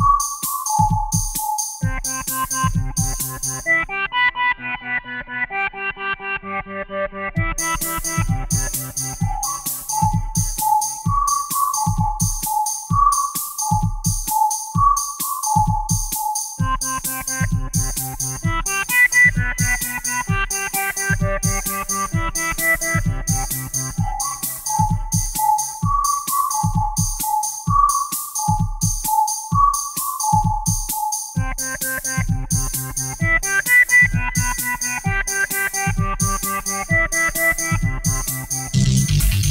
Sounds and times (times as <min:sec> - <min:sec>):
Synthesizer: 0:00.0 - 0:39.5.